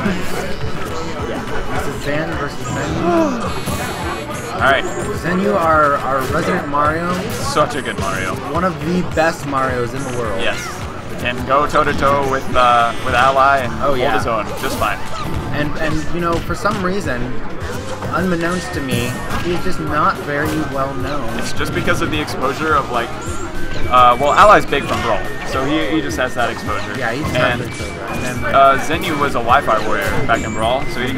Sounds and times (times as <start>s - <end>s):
Speech: 0.0s - 17.4s, 18.1s - 23.1s, 23.9s - 31.1s.